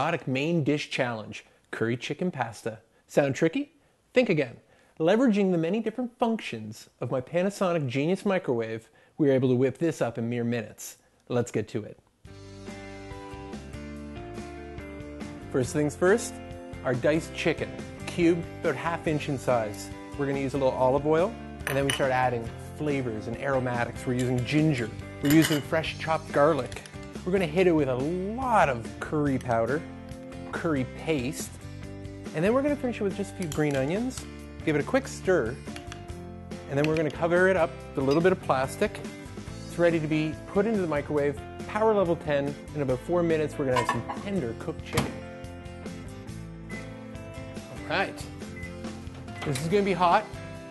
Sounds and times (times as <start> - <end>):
Speech: 0.0 - 12.0, 15.6 - 29.8, 30.5 - 31.5, 32.4 - 35.6, 36.7 - 39.1, 39.7 - 45.2, 47.8 - 48.3, 49.4 - 50.3
Music: 12.2 - 50.7.